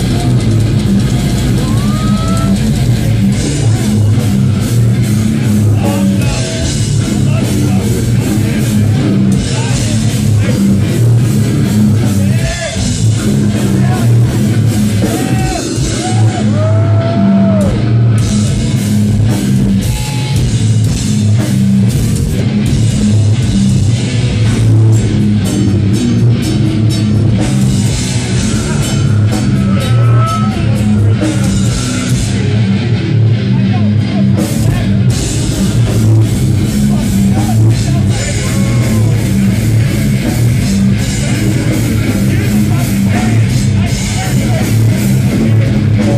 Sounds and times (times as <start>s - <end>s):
Heavy metal: 0.0s - 46.1s.